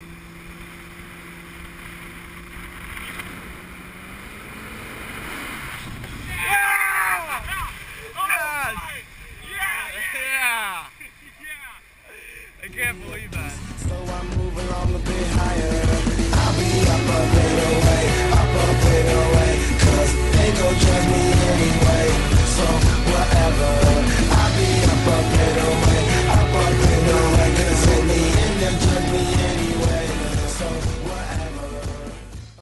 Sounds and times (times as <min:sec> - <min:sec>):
Music: 0:12.6 - 0:32.6.